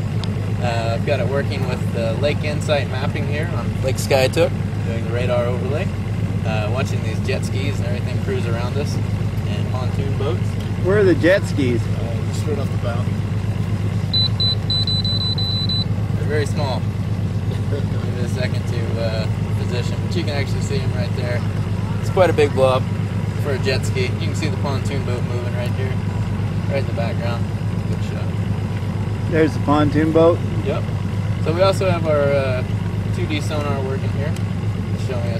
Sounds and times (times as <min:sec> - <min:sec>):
Speech: 0:00.6 - 0:13.1, 0:16.2 - 0:16.8, 0:17.7 - 0:21.4, 0:22.0 - 0:22.8, 0:23.4 - 0:26.0, 0:26.7 - 0:28.3, 0:29.3 - 0:34.4, 0:35.0 - 0:35.3.